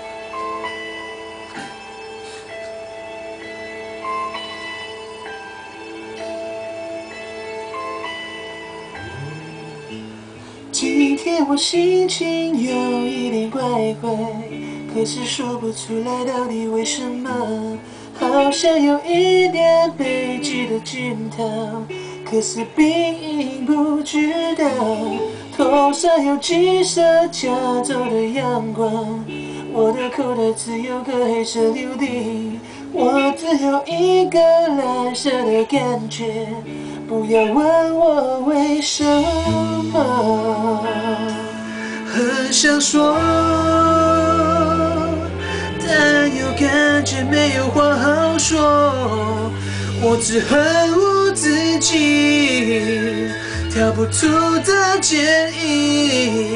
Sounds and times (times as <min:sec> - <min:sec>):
Music: 0:00.0 - 0:56.5.